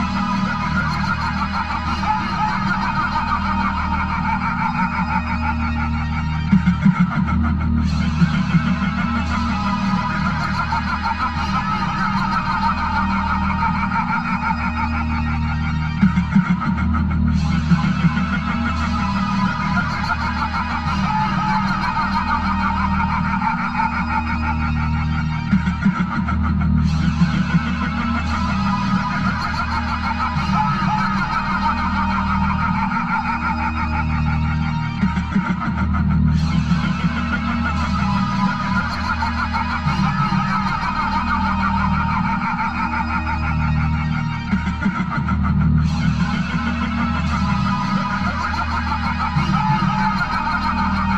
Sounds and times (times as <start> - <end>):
Laughter: 0.0 - 51.1
Music: 0.0 - 51.1.